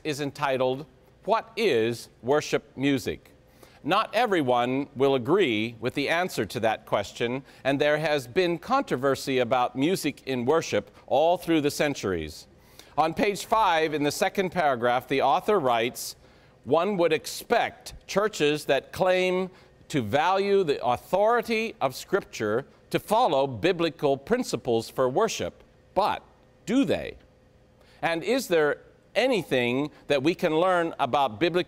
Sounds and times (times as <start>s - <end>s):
Speech: 0.0s - 27.2s, 28.0s - 31.6s.